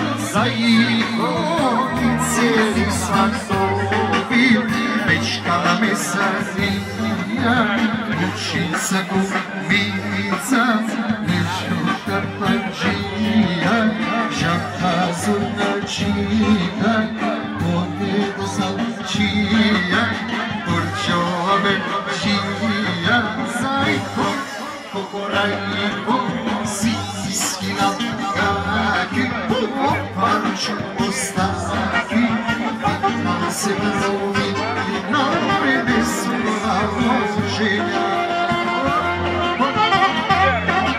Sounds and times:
Music: 0.0s - 40.9s
Speech: 0.0s - 40.9s.

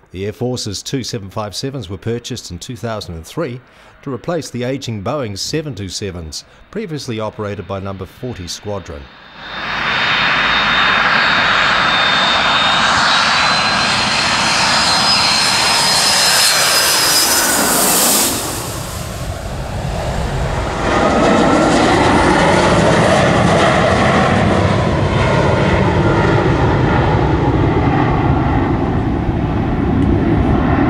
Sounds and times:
Aircraft engine: 9.1s - 30.8s
Fixed-wing aircraft, airplane: 9.1s - 30.8s.

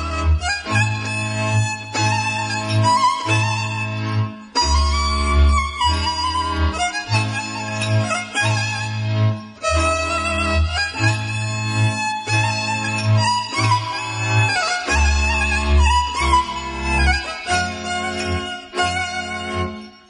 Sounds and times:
Music: 0.0s - 20.0s.

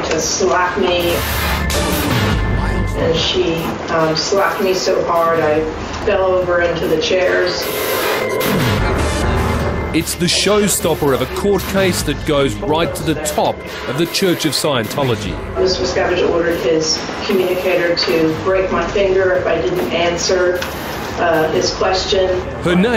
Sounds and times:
Speech: 10.0s - 20.6s, 21.2s - 22.9s.

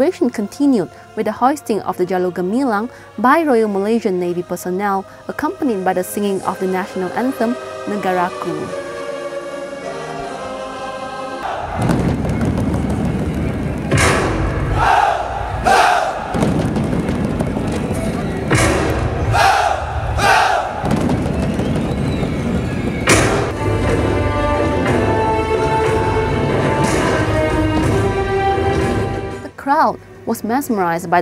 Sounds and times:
Speech: 0.0s - 8.7s, 29.5s - 31.2s
Choir: 0.1s - 12.2s, 14.0s - 16.5s, 19.2s - 21.2s.

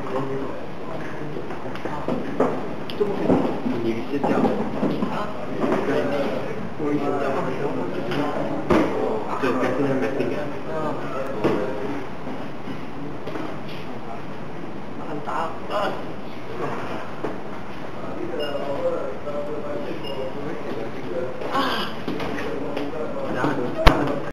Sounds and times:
Speech: 18.0s - 24.3s.

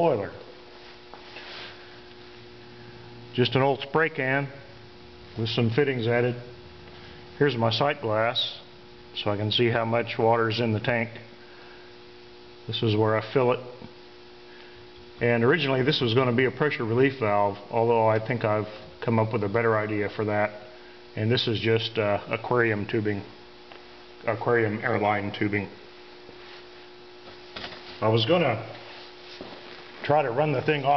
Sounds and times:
Speech: 0.0s - 0.5s, 3.3s - 4.7s, 5.4s - 6.6s, 7.4s - 11.3s, 12.7s - 13.9s, 15.2s - 23.4s, 24.2s - 25.8s, 28.0s - 28.8s, 30.0s - 30.9s.

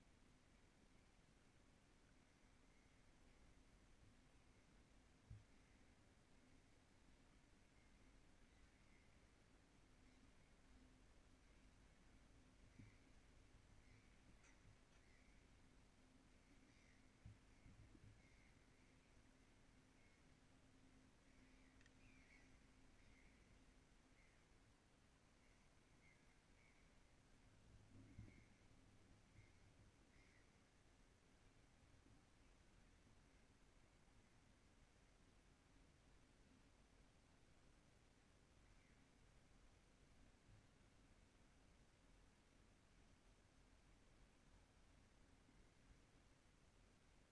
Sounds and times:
Silence: 0.0s - 47.3s.

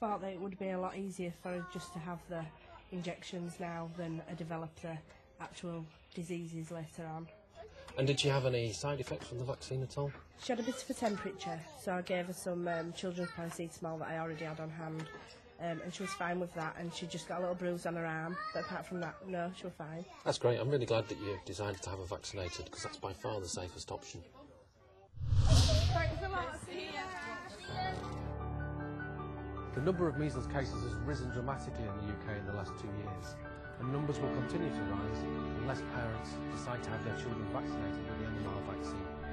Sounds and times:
Music: 27.4s - 39.3s.

